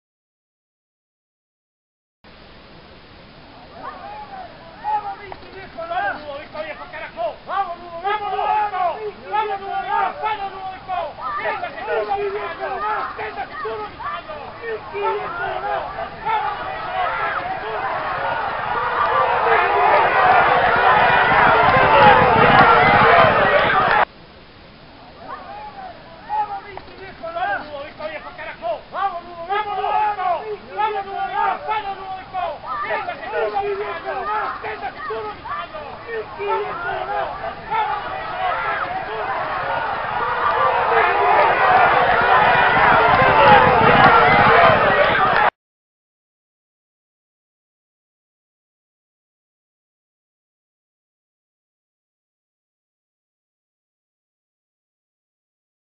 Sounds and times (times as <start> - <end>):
Speech: 3.6 - 20.4, 25.1 - 39.9.